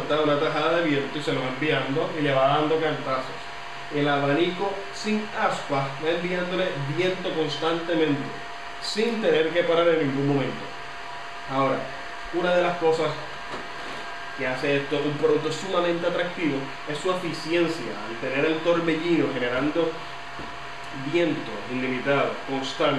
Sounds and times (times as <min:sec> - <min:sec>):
Speech: 0:00.0 - 0:10.7, 0:11.5 - 0:13.3, 0:14.4 - 0:20.0, 0:20.9 - 0:22.9.